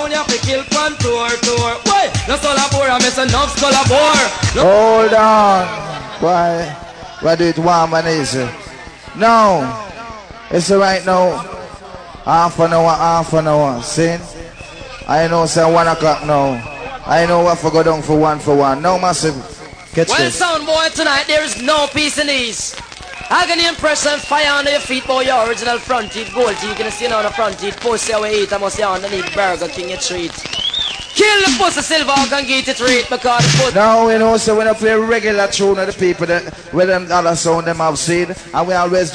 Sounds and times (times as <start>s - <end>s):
Speech: 0.0s - 9.9s, 10.5s - 14.4s, 15.0s - 30.4s, 31.2s - 39.1s.